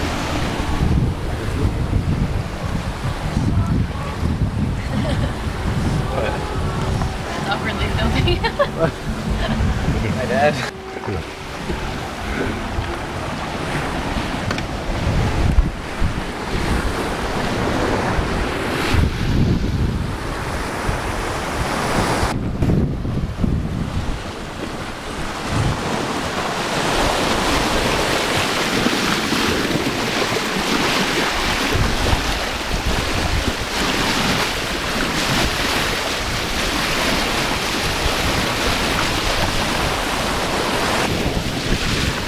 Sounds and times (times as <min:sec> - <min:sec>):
Ship: 0:00.0 - 0:42.2
Waves, surf: 0:00.0 - 0:42.2
Wind noise (microphone): 0:00.0 - 0:42.2.